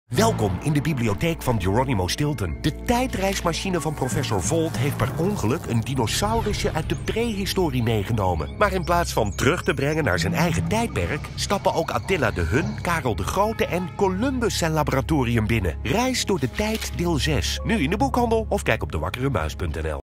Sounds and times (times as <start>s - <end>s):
Music: 0.1s - 20.0s
Speech: 0.1s - 20.0s.